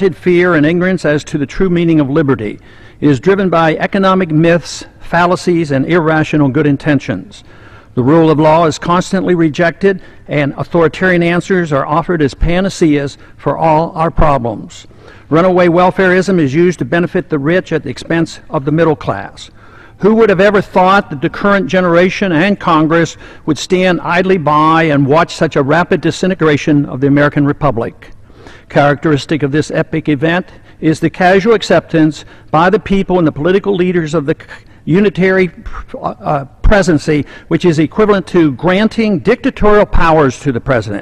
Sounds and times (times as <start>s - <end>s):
Male speech, man speaking: 0.0s - 7.4s, 8.0s - 28.1s, 28.7s - 41.0s.